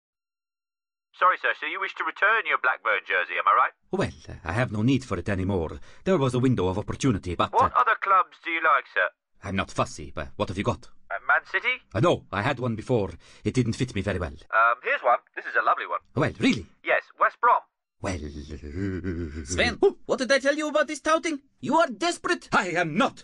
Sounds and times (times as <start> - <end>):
Speech synthesizer: 1.2 - 5.6, 6.2 - 18.6, 19.4 - 23.2.